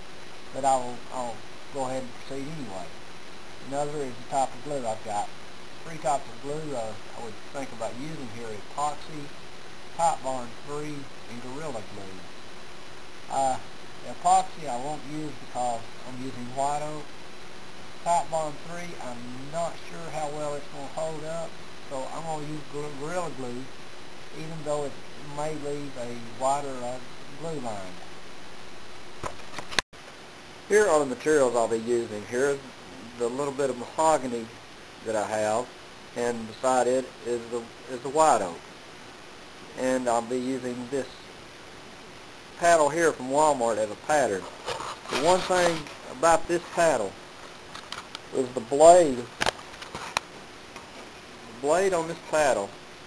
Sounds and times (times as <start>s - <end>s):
Speech: 0.5s - 2.9s, 3.6s - 9.3s, 10.0s - 12.2s, 13.3s - 17.1s, 18.0s - 23.7s, 24.4s - 28.0s, 30.7s - 38.6s, 39.8s - 41.2s, 42.6s - 44.5s, 45.1s - 47.2s, 48.3s - 49.3s, 51.5s - 52.8s.